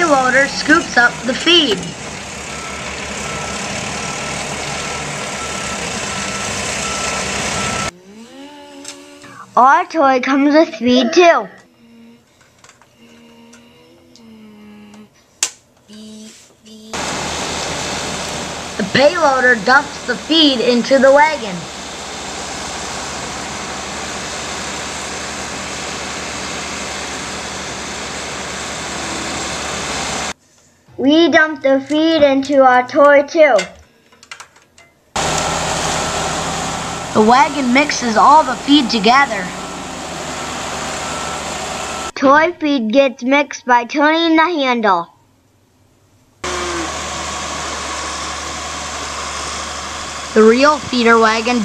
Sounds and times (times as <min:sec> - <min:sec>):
Speech: 0:00.0 - 0:01.9, 0:09.0 - 0:12.2, 0:18.8 - 0:21.7, 0:31.0 - 0:33.8, 0:37.2 - 0:39.6, 0:42.2 - 0:45.1, 0:50.4 - 0:51.6.